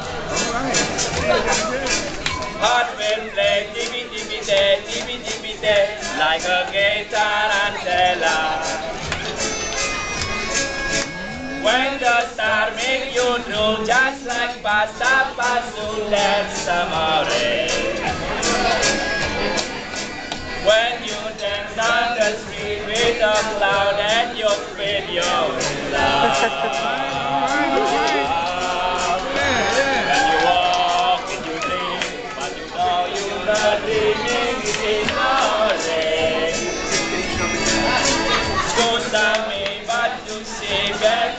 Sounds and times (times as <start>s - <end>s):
Music: 0.0s - 41.3s
Male singing: 2.6s - 8.9s, 11.5s - 18.2s, 20.6s - 36.8s, 38.7s - 41.3s.